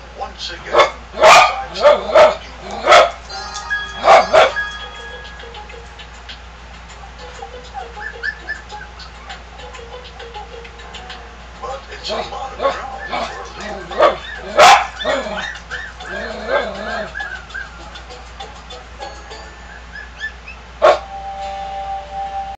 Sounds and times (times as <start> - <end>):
Dog: 0.8 - 3.2, 4.0 - 4.6, 12.6 - 17.7, 20.0 - 21.0
Music: 3.3 - 13.9, 15.5 - 20.0, 21.0 - 22.5.